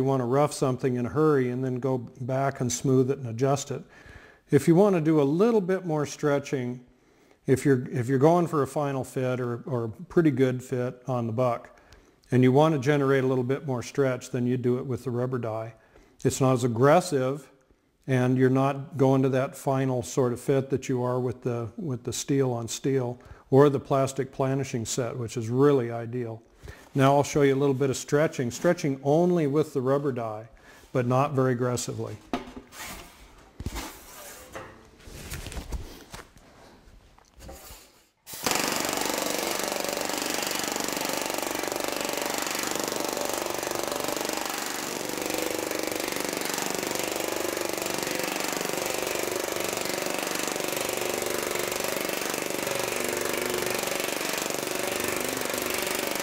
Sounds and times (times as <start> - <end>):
Speech: 0.0 - 3.9, 4.5 - 6.8, 7.5 - 11.7, 12.3 - 17.5, 18.1 - 26.4, 27.0 - 32.3.